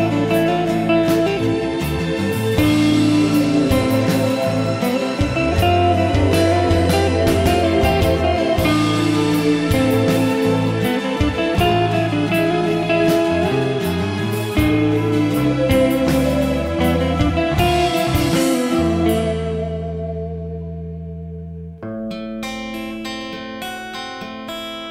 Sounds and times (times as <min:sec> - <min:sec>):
Steel guitar, slide guitar: 0:00.0 - 0:24.9.